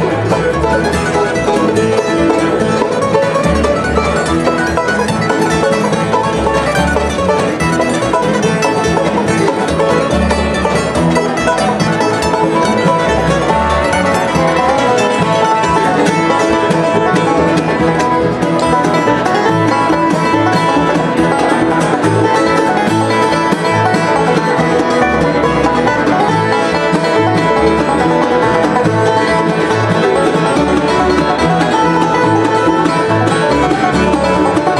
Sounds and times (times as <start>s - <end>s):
Banjo: 0.0s - 34.7s
Mandolin: 0.0s - 34.7s.